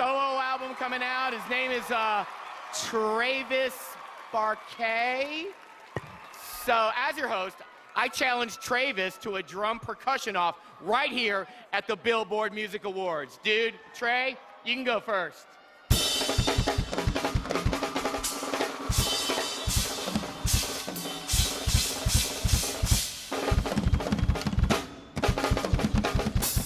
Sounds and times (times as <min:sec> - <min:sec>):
Speech: 0:00.0 - 0:05.5, 0:06.4 - 0:15.4
Drum: 0:15.9 - 0:26.6
Drum kit: 0:15.9 - 0:26.6.